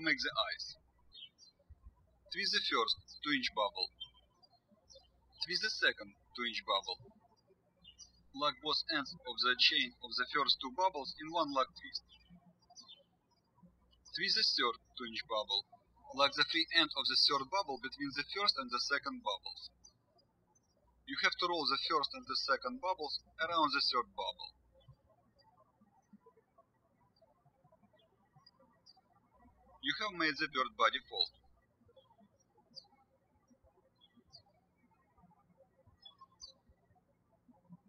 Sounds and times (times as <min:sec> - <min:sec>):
Speech: 0:00.0 - 0:00.8, 0:02.3 - 0:04.0, 0:05.4 - 0:07.0, 0:08.4 - 0:12.0, 0:14.2 - 0:19.7, 0:21.1 - 0:24.5, 0:29.8 - 0:31.3.